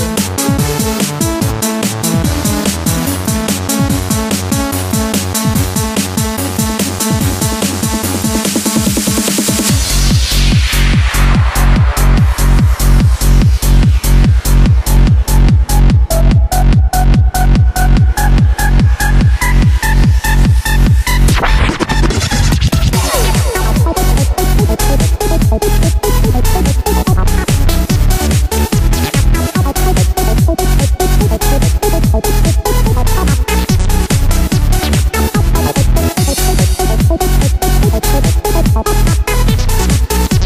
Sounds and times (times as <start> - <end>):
Techno: 0.0 - 40.4
Trance music: 0.0 - 40.4.